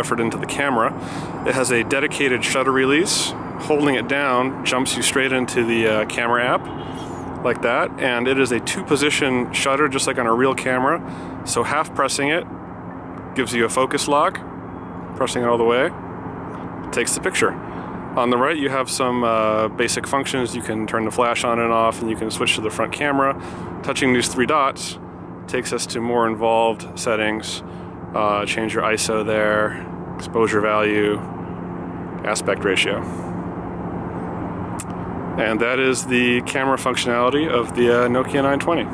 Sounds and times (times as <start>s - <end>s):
Speech: 0.0s - 6.7s, 7.4s - 12.5s, 13.4s - 14.4s, 15.2s - 16.0s, 16.9s - 17.6s, 18.2s - 31.3s, 32.2s - 33.2s, 35.4s - 38.9s.